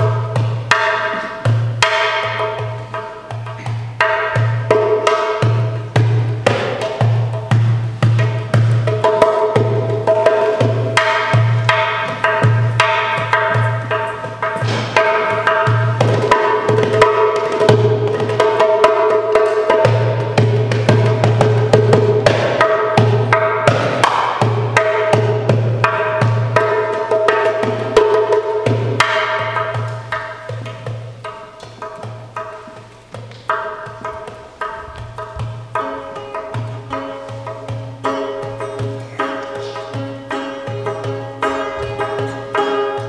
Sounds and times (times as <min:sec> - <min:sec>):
Music: 0:00.0 - 0:43.0.